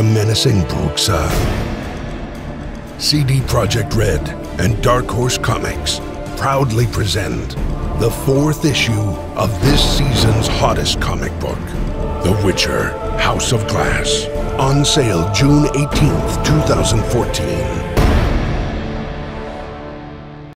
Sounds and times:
Speech: 0:00.0 - 0:01.6, 0:03.0 - 0:18.0
Music: 0:00.0 - 0:20.5.

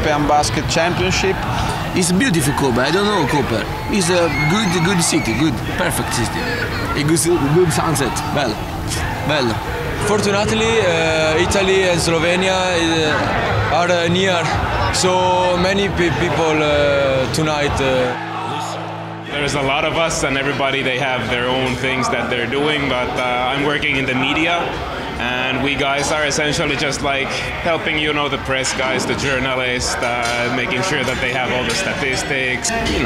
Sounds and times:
Speech: 0:19.3 - 0:33.0.

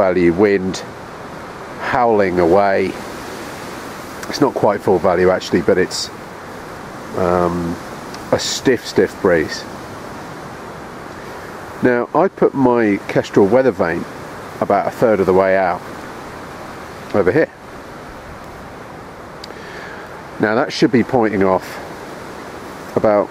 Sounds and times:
Speech: 0:00.0 - 0:00.9, 0:01.8 - 0:03.0, 0:04.2 - 0:06.1, 0:07.2 - 0:09.7, 0:11.8 - 0:15.8, 0:17.1 - 0:17.6, 0:20.4 - 0:21.9, 0:22.9 - 0:23.3.

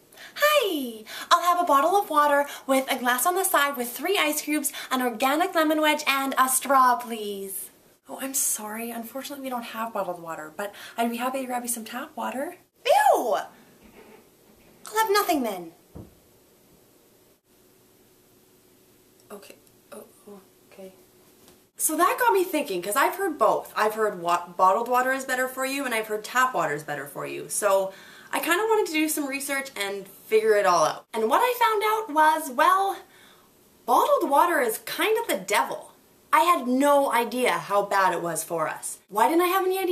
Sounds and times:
Speech: 0:00.4 - 0:13.5, 0:14.9 - 0:15.8, 0:19.3 - 0:21.0, 0:21.8 - 0:33.1, 0:33.9 - 0:39.9.

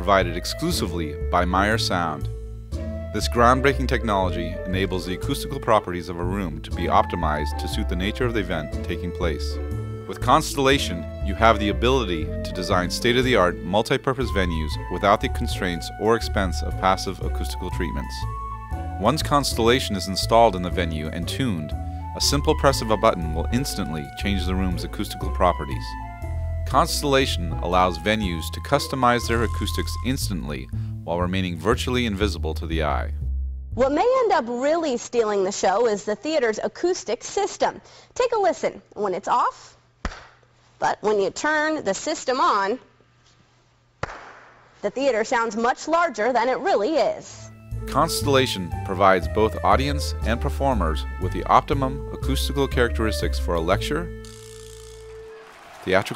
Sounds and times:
Speech: 0:00.0 - 0:02.3, 0:03.2 - 0:18.2, 0:19.0 - 0:26.0, 0:26.7 - 0:33.2, 0:33.8 - 0:39.8, 0:40.8 - 0:42.9, 0:44.8 - 0:54.2, 0:55.9 - 0:56.1
Music: 0:00.0 - 0:34.2, 0:47.4 - 0:56.1.

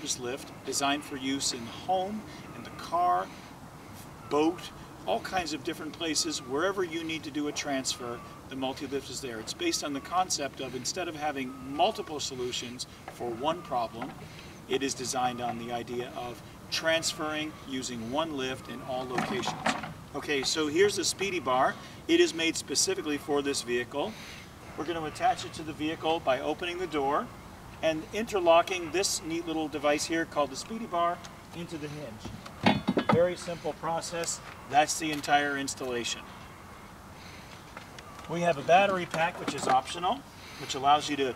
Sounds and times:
Speech: 0:00.0 - 0:03.3, 0:04.3 - 0:14.1, 0:14.7 - 0:24.1, 0:24.8 - 0:32.3, 0:33.1 - 0:36.2, 0:38.3 - 0:41.3.

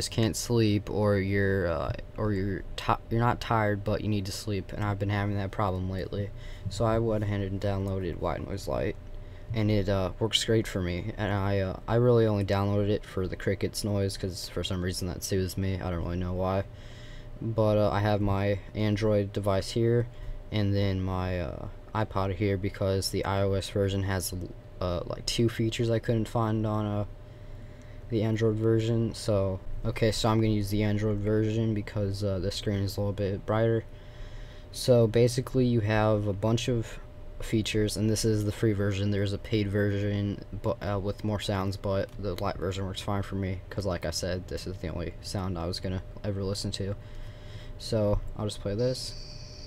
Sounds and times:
Speech: 0:00.0 - 0:16.7, 0:17.4 - 0:27.1, 0:28.1 - 0:33.9, 0:34.7 - 0:47.0, 0:47.8 - 0:49.6.

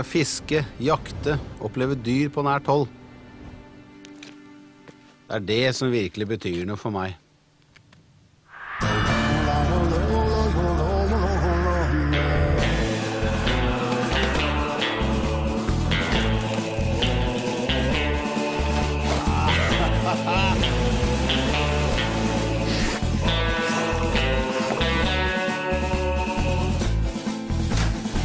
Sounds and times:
Speech: 0:00.0 - 0:02.9, 0:05.3 - 0:07.2
Rhythm and blues: 0:09.0 - 0:28.2.

